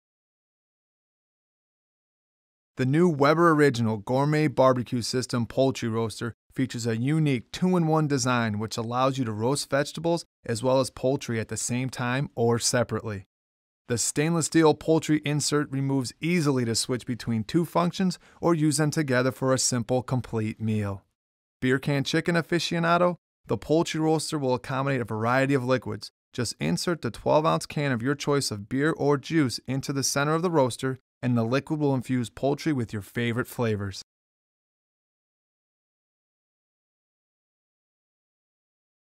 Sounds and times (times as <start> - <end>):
Speech: 2.8 - 13.3, 13.9 - 34.1.